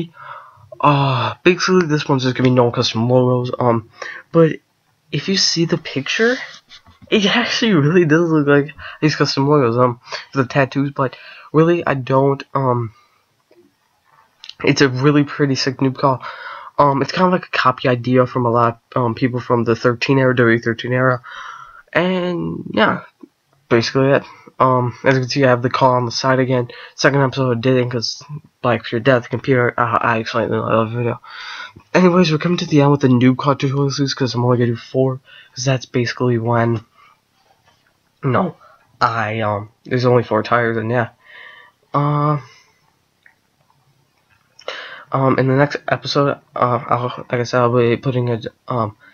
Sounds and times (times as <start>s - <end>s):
Speech: 0.0s - 0.2s, 0.8s - 13.0s, 14.4s - 36.9s, 38.2s - 41.2s, 41.9s - 42.6s, 44.6s - 49.0s.